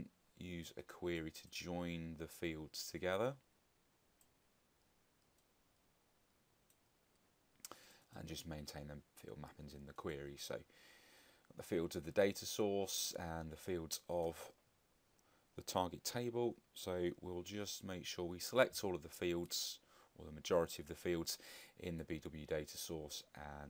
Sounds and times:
Speech: 0:00.0 - 0:03.4, 0:08.1 - 0:10.7, 0:11.6 - 0:14.6, 0:15.6 - 0:23.7
Inside, small room: 0:00.0 - 0:23.7
Clicking: 0:04.2 - 0:05.9.

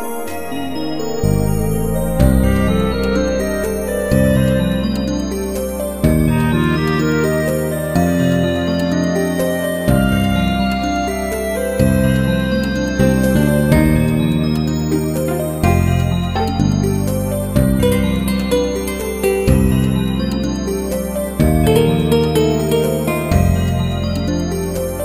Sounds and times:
Music: 0:00.0 - 0:25.0.

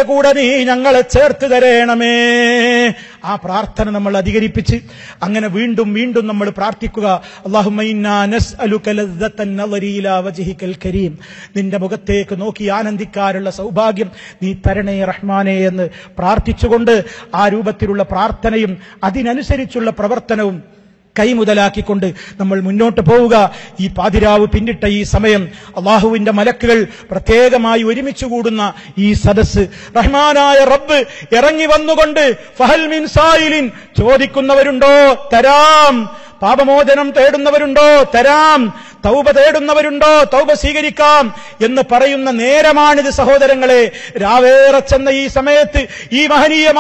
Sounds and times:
Male speech, man speaking: 0:00.0 - 0:20.6, 0:21.2 - 0:46.8
Narration, monologue: 0:00.0 - 0:46.8.

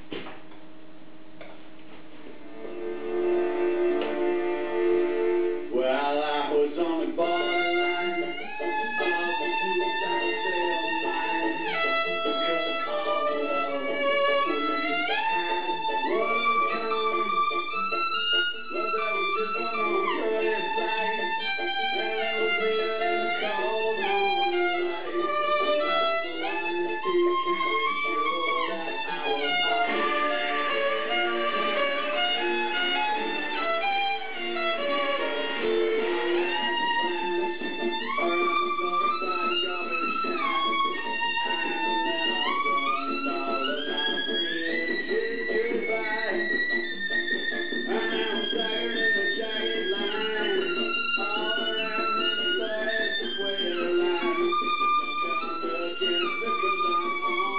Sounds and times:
Violin, fiddle: 0:02.5 - 0:57.5.

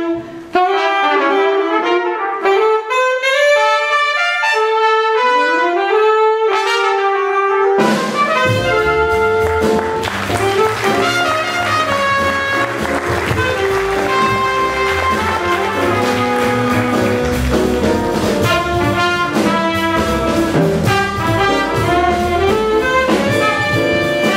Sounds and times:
Jazz: 0:00.0 - 0:24.3
Orchestra: 0:00.0 - 0:24.3
Piano: 0:00.0 - 0:24.3
Saxophone: 0:00.0 - 0:24.3
Trumpet: 0:00.0 - 0:24.3
Drum kit: 0:00.1 - 0:24.3
Drum: 0:07.7 - 0:24.3.

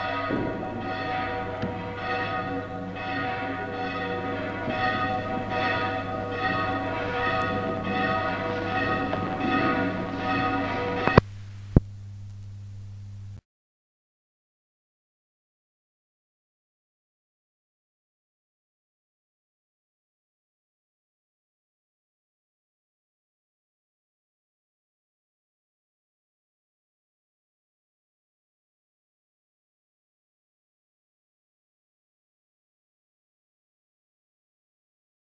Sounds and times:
Bell: 0:00.0 - 0:11.2.

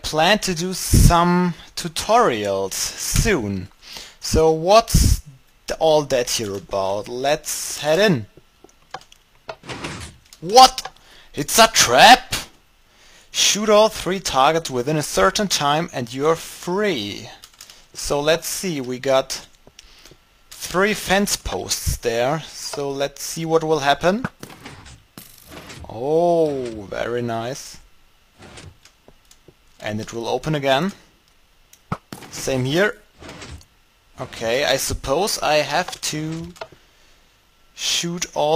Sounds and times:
Speech: 0:00.0 - 0:08.3, 0:10.4 - 0:12.6, 0:13.4 - 0:17.4, 0:18.0 - 0:19.5, 0:20.6 - 0:24.3, 0:25.8 - 0:27.8, 0:29.8 - 0:31.0, 0:32.3 - 0:33.1, 0:34.2 - 0:36.6, 0:37.8 - 0:38.5.

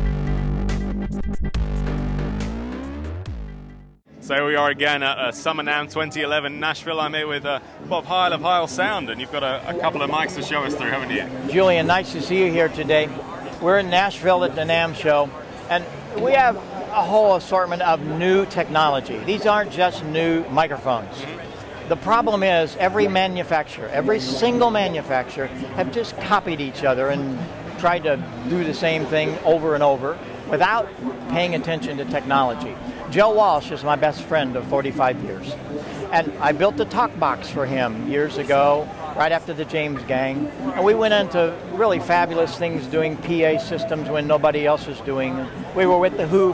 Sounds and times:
Speech: 0:04.2 - 0:46.5.

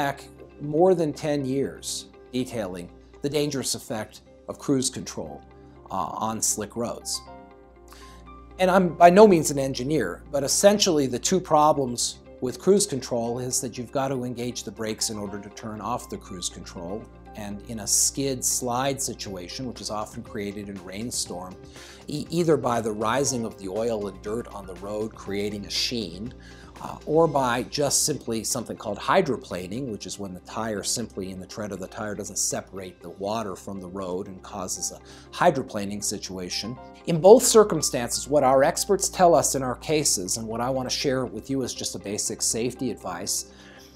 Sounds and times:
Speech: 0:00.0 - 0:07.3, 0:08.6 - 0:43.5
Music: 0:00.0 - 0:43.9.

